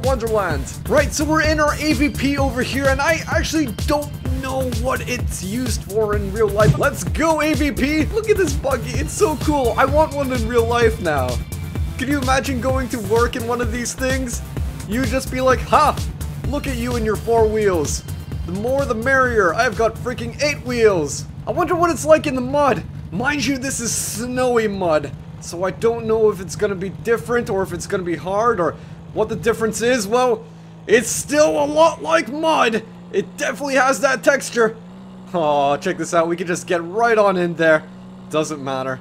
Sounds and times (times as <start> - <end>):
Speech: 0.0 - 11.4, 12.0 - 39.0
Music: 0.0 - 22.8.